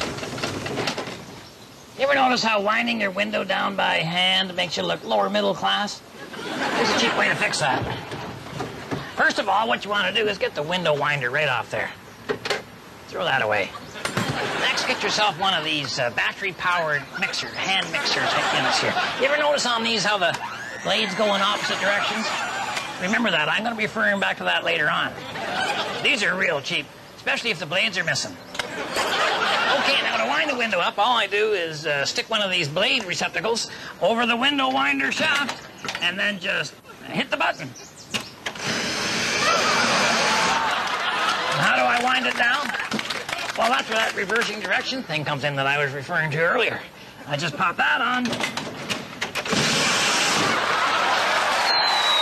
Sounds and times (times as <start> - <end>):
Speech: 2.0 - 6.0, 6.7 - 8.0, 9.1 - 12.0, 13.1 - 13.8, 14.6 - 22.4, 23.0 - 25.2, 26.0 - 28.4, 29.7 - 37.8, 41.5 - 42.8, 43.6 - 48.4.